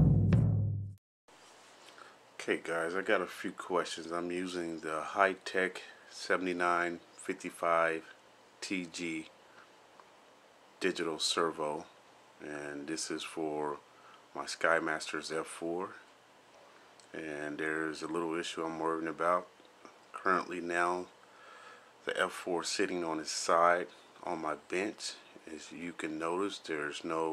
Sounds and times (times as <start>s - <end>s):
Speech: 2.4s - 9.3s, 10.8s - 13.8s, 14.4s - 16.1s, 17.1s - 19.5s, 20.2s - 21.2s, 22.0s - 27.3s.